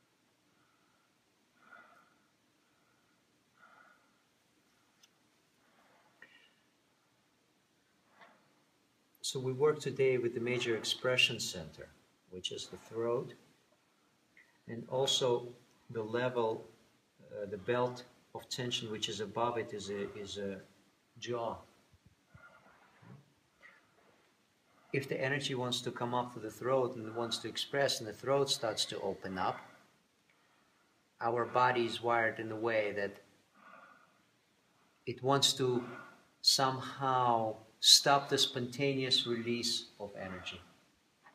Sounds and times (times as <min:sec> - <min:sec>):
Breathing: 0:00.5 - 0:04.3, 0:05.6 - 0:06.8, 0:29.5 - 0:31.0, 0:33.5 - 0:35.0, 0:35.8 - 0:36.4
Male speech, man speaking: 0:09.2 - 0:13.4, 0:14.7 - 0:16.6, 0:17.3 - 0:21.6, 0:25.0 - 0:29.6, 0:31.2 - 0:33.2, 0:35.1 - 0:40.7.